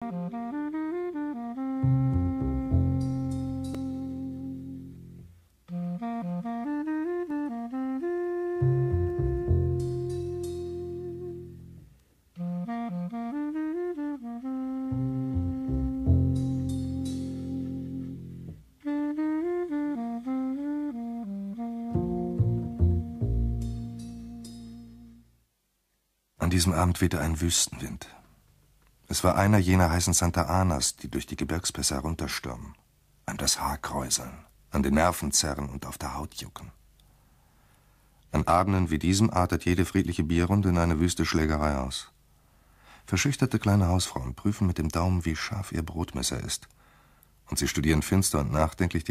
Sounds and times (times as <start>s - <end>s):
Speech: 26.4s - 28.2s, 29.1s - 36.8s, 38.3s - 42.2s, 43.1s - 46.8s, 47.5s - 49.1s.